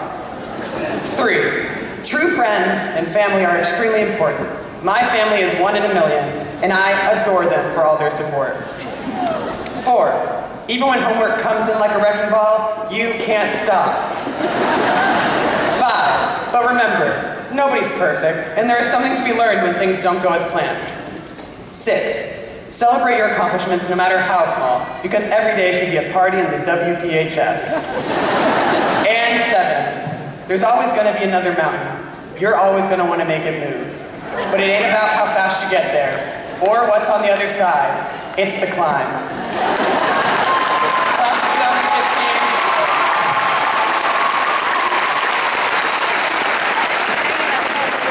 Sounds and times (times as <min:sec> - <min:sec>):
Narration, monologue: 0:00.8 - 0:08.7, 0:09.7 - 0:14.2, 0:15.2 - 0:28.0, 0:28.8 - 0:39.6
Male speech, man speaking: 0:01.1 - 0:08.6, 0:09.8 - 0:14.0, 0:15.7 - 0:21.0, 0:21.7 - 0:27.8, 0:29.0 - 0:39.2, 0:41.2 - 0:42.6.